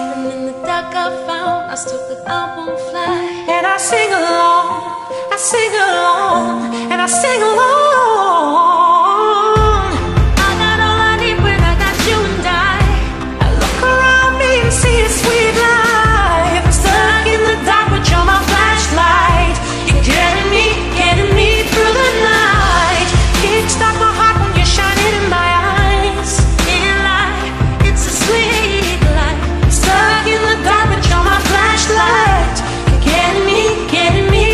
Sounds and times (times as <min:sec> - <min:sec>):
Pop music: 0:00.0 - 0:34.5
Singing: 0:05.5 - 0:34.5
Music of Asia: 0:09.6 - 0:34.5.